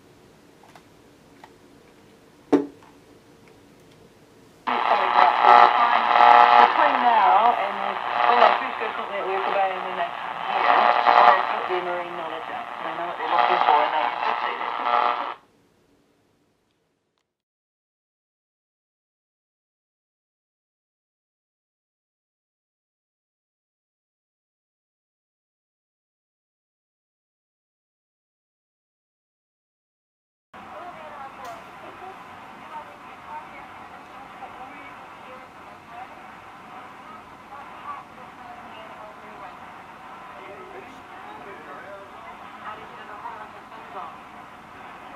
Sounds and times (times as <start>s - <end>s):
Speech: 4.7s - 15.0s, 30.7s - 39.7s, 40.3s - 45.1s
Radio: 4.7s - 15.4s, 30.6s - 45.1s.